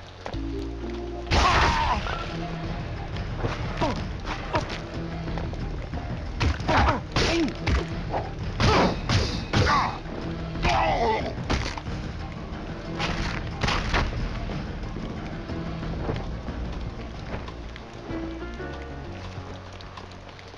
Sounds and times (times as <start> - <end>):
Music: 0.0 - 20.5
Outside, urban or manmade: 0.0 - 20.5.